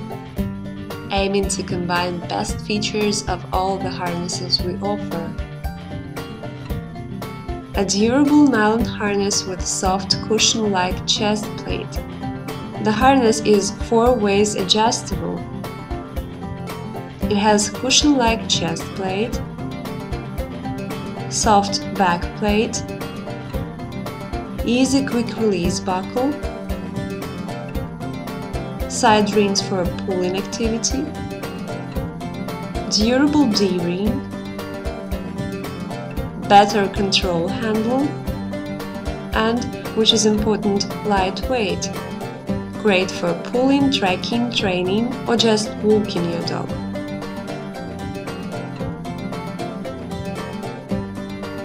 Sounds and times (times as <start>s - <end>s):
Music: 0.0s - 51.6s
Speech: 1.1s - 5.4s, 7.8s - 12.0s, 12.8s - 15.4s, 17.3s - 19.4s, 21.3s - 22.8s, 24.7s - 26.4s, 28.9s - 31.2s, 32.9s - 34.2s, 36.4s - 38.1s, 39.4s - 42.0s, 42.8s - 46.7s.